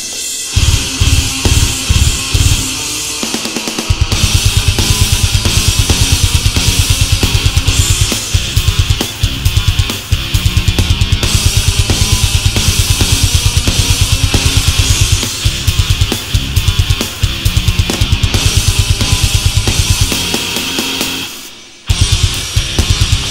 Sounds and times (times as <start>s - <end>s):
Music: 0.0s - 23.3s.